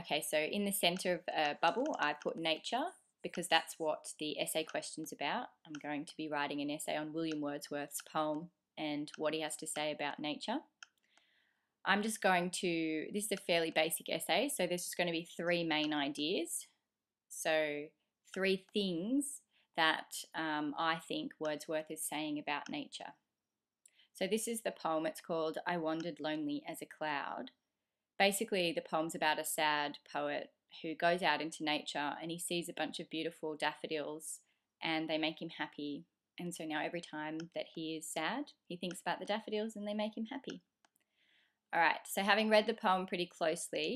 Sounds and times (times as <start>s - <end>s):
Speech: 0.0s - 10.7s, 11.9s - 16.7s, 17.4s - 23.2s, 24.2s - 27.5s, 28.2s - 40.6s, 41.8s - 43.9s.